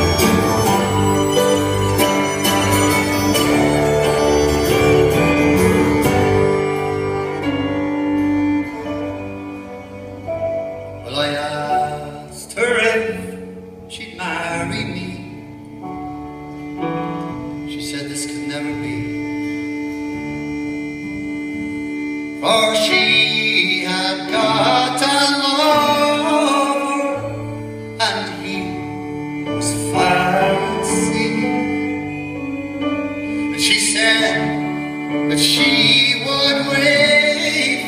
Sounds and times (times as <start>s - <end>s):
Guitar: 0.0s - 37.8s
Inside, large room or hall: 0.0s - 37.8s.